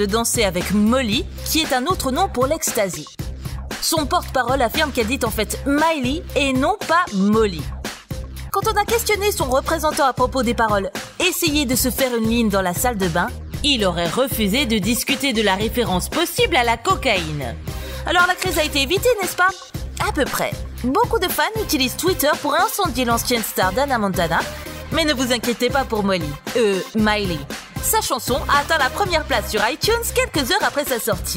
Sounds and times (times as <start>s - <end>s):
Speech: 0.0s - 3.2s, 3.8s - 7.8s, 8.6s - 31.3s
Music: 0.0s - 31.3s.